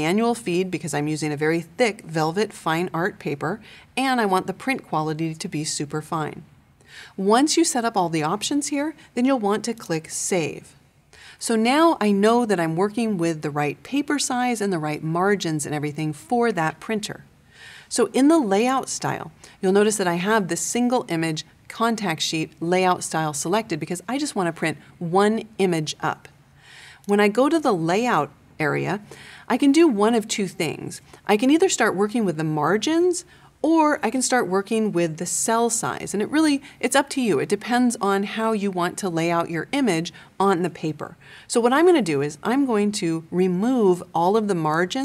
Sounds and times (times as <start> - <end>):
Speech: 0.0 - 6.5, 7.2 - 10.8, 11.4 - 17.3, 17.9 - 26.3, 27.1 - 45.0.